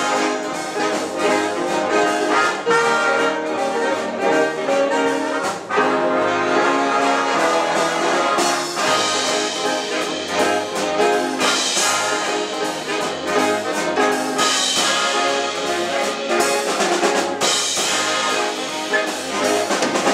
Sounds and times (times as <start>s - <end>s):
Swing music: 0.0s - 20.1s.